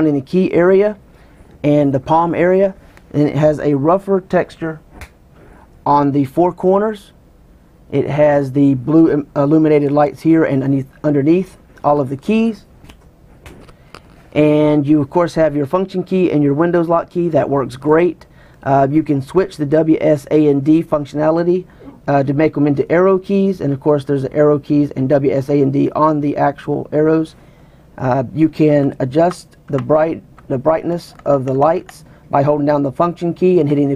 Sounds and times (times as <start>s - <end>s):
Speech: 0.0s - 1.0s, 1.6s - 4.8s, 5.8s - 7.2s, 7.9s - 12.7s, 14.4s - 27.4s, 28.0s - 33.9s.